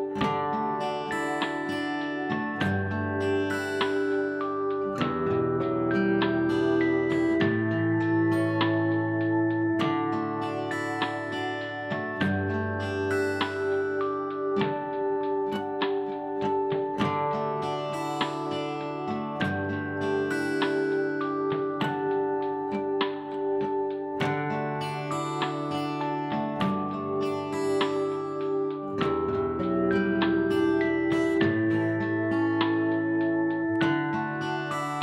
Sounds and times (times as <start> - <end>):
Acoustic guitar: 0.0 - 35.0.